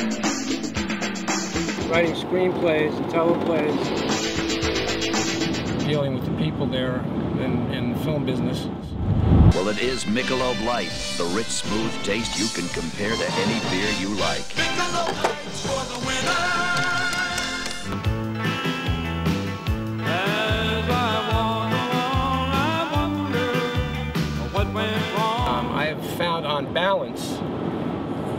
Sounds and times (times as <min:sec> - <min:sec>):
Music: 0:00.0 - 0:02.1, 0:03.6 - 0:06.0, 0:09.5 - 0:25.9
Speech: 0:01.9 - 0:03.8, 0:05.8 - 0:08.9, 0:09.6 - 0:14.4, 0:25.4 - 0:27.4.